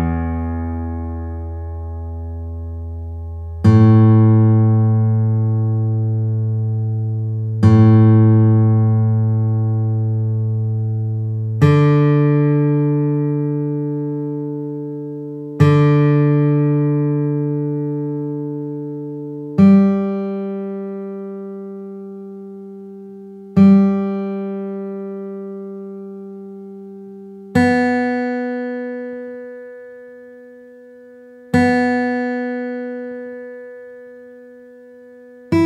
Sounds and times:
Music: 0:00.0 - 0:35.6.

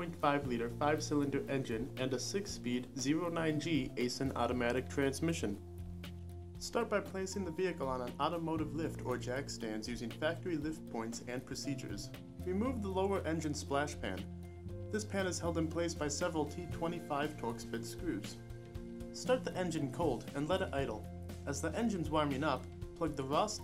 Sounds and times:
Speech: 0:00.0 - 0:05.6, 0:06.6 - 0:14.3, 0:14.9 - 0:18.4, 0:19.2 - 0:23.6
Music: 0:00.0 - 0:23.6.

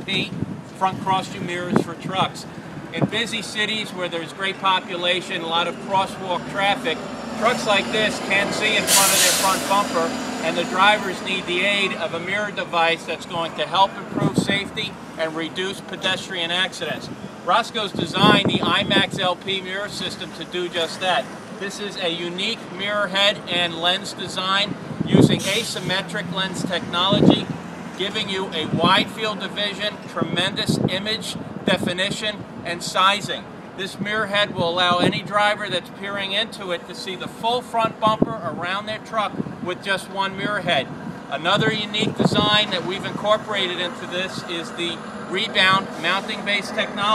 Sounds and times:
Speech: 0:00.0 - 0:47.1
Vehicle: 0:00.0 - 0:47.1.

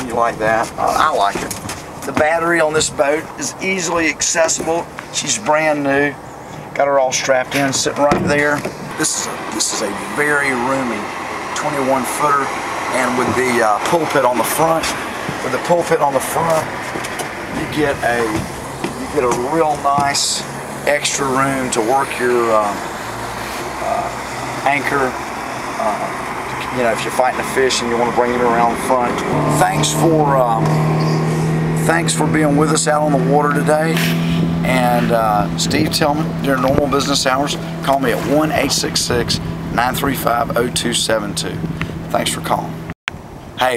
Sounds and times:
Speech: 0:00.0 - 0:06.2, 0:06.8 - 0:16.7, 0:17.6 - 0:22.8, 0:23.8 - 0:25.2, 0:25.8 - 0:30.8, 0:31.8 - 0:34.0, 0:34.6 - 0:42.8
Outside, rural or natural: 0:00.0 - 0:43.7.

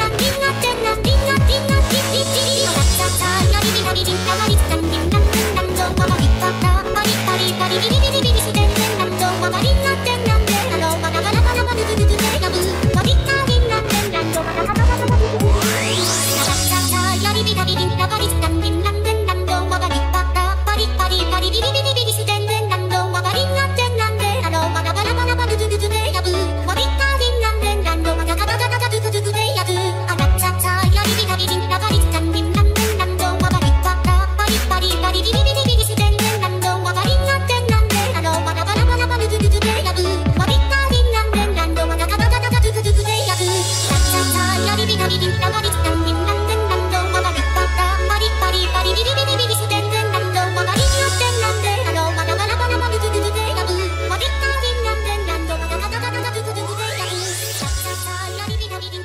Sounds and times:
Music: 0:00.0 - 0:59.0.

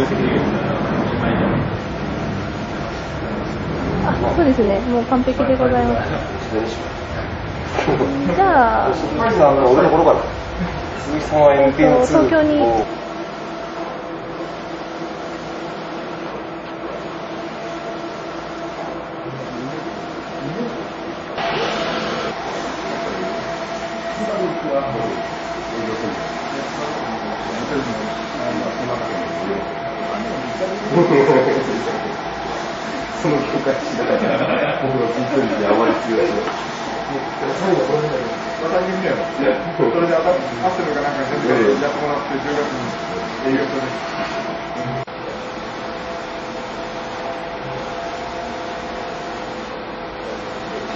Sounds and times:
Printer: 0:00.0 - 0:50.9
Speech: 0:24.2 - 0:32.2, 0:34.8 - 0:44.1.

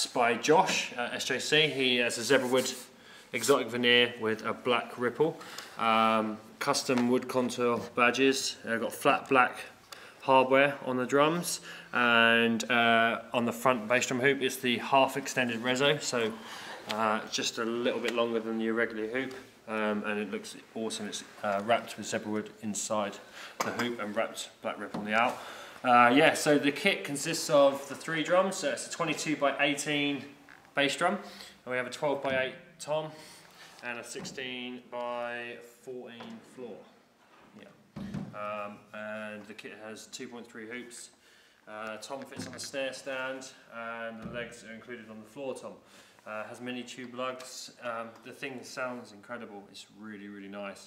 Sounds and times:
Speech: 0:00.0 - 0:33.2, 0:33.8 - 0:50.8.

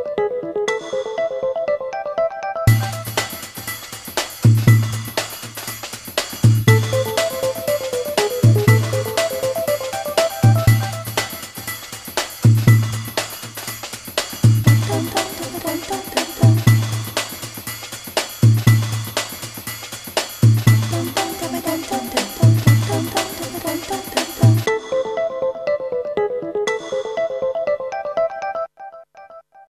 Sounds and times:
Music: 0:00.0 - 0:28.7.

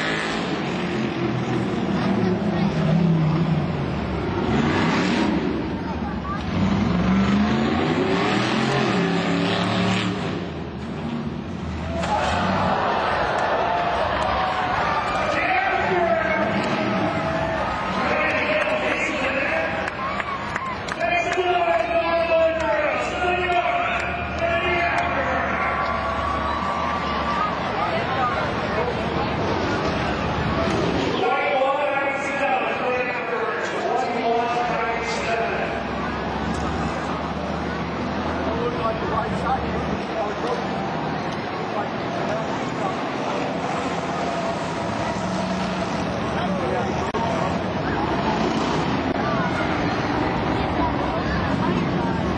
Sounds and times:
Speech: 0:15.2 - 0:16.7, 0:17.9 - 0:20.2, 0:20.9 - 0:26.0, 0:27.0 - 0:35.9, 0:38.3 - 0:43.9.

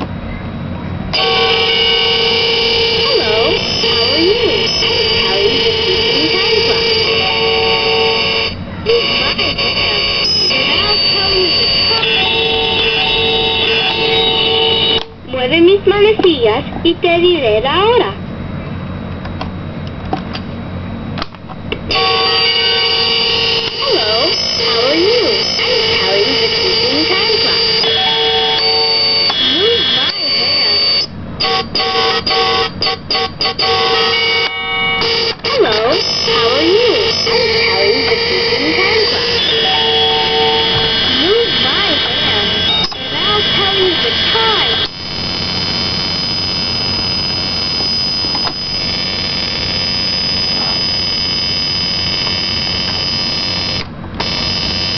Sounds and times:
Speech: 0:03.0 - 0:07.6, 0:08.8 - 0:14.4, 0:15.3 - 0:18.2, 0:23.7 - 0:28.0, 0:29.4 - 0:30.9, 0:35.5 - 0:40.5, 0:41.1 - 0:44.9.

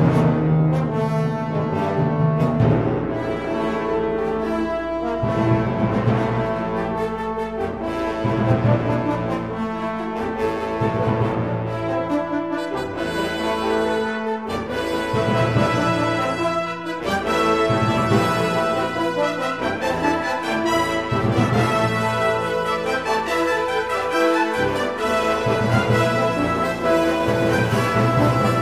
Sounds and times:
Orchestra: 0:00.0 - 0:28.6.

